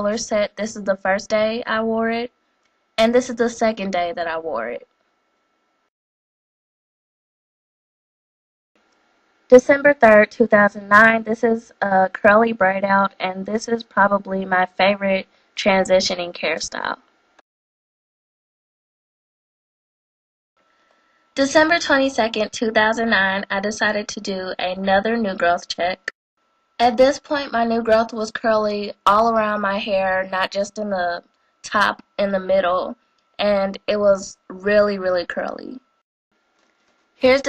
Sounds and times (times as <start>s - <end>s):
Speech: 0.0s - 2.3s, 3.0s - 4.8s, 9.5s - 17.0s, 21.4s - 26.1s, 26.8s - 35.8s, 37.2s - 37.4s.